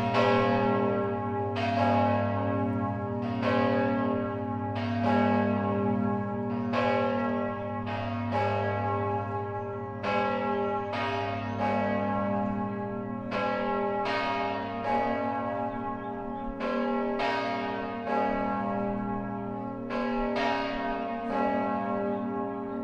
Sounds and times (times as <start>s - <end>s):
Church bell: 0.0s - 22.8s.